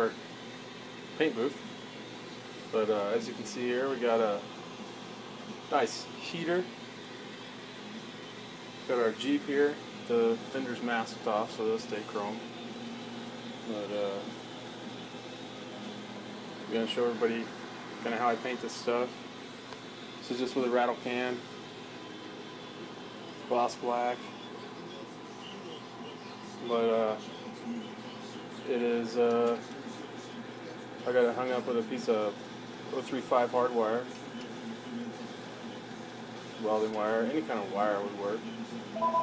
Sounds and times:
Speech: 0:01.2 - 0:01.6, 0:02.7 - 0:04.5, 0:05.7 - 0:06.7, 0:08.9 - 0:12.5, 0:13.7 - 0:14.4, 0:16.7 - 0:19.2, 0:20.2 - 0:21.4, 0:23.4 - 0:39.0.

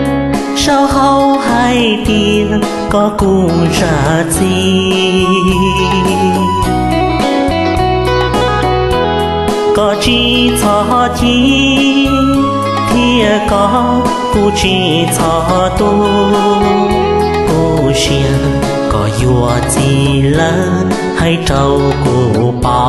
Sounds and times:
Music: 0:00.0 - 0:22.8.

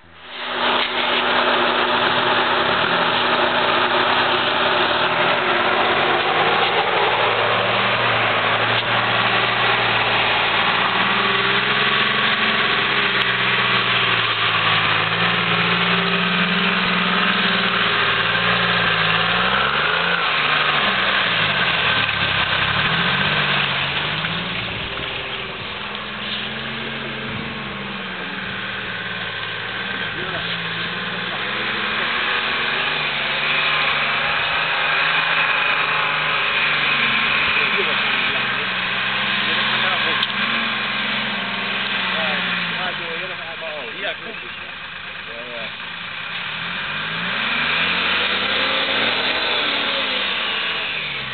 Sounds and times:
Truck: 0:00.0 - 0:51.3.

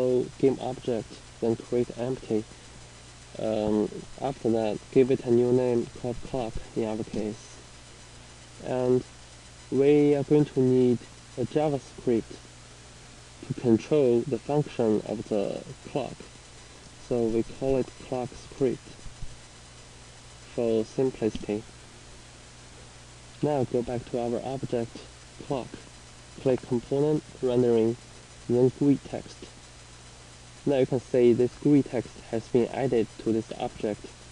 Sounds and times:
Speech: 0:00.0 - 0:02.5, 0:03.4 - 0:07.6, 0:08.6 - 0:09.1, 0:09.7 - 0:12.4, 0:13.4 - 0:16.3, 0:17.0 - 0:19.0, 0:20.5 - 0:21.7, 0:23.4 - 0:29.6, 0:30.6 - 0:34.2.

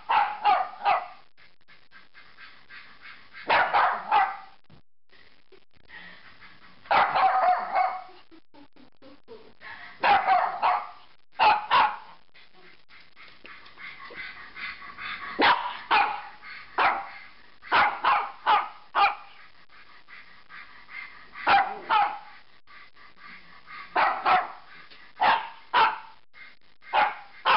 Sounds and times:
Bark: 0:00.0 - 0:01.3, 0:03.4 - 0:04.6, 0:06.9 - 0:08.1, 0:10.0 - 0:12.2, 0:15.4 - 0:19.4, 0:21.4 - 0:22.4, 0:23.9 - 0:26.2, 0:26.9 - 0:27.5
Speech: 0:08.0 - 0:09.8.

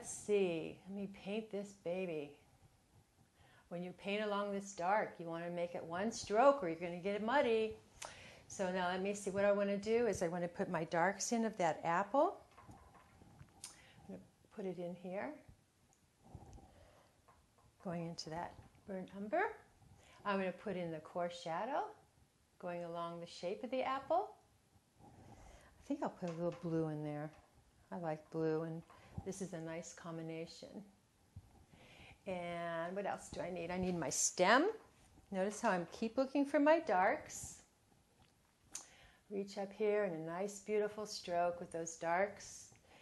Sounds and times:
Speech: 0:00.0 - 0:02.4, 0:03.7 - 0:07.8, 0:08.5 - 0:12.4, 0:14.1 - 0:15.5, 0:17.8 - 0:19.6, 0:20.2 - 0:22.0, 0:22.6 - 0:24.4, 0:25.8 - 0:30.9, 0:32.3 - 0:37.6, 0:39.3 - 0:42.8.

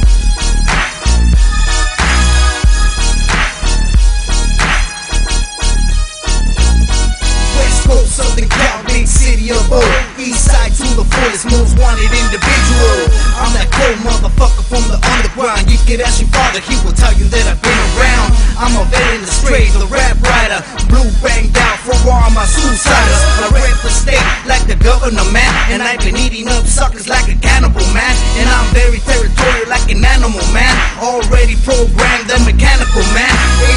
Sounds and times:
Music: 0:00.0 - 0:33.7.

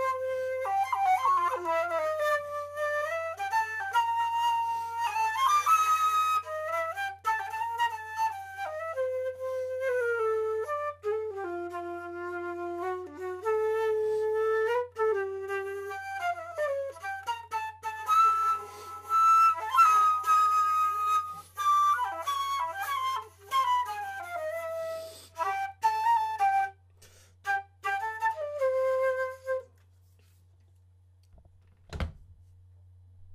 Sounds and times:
Flute: 0:00.0 - 0:30.4.

